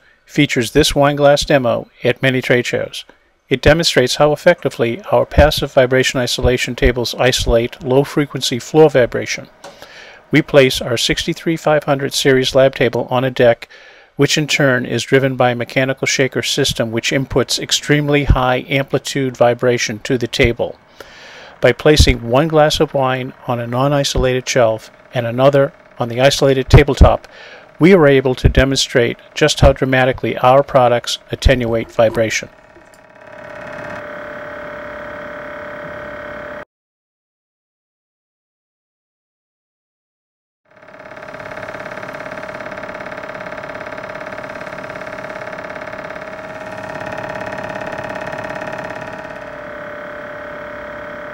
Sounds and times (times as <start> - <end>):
Speech: 0.3 - 9.5, 10.4 - 20.8, 21.6 - 32.5
Vibration: 14.5 - 36.6, 40.7 - 51.3.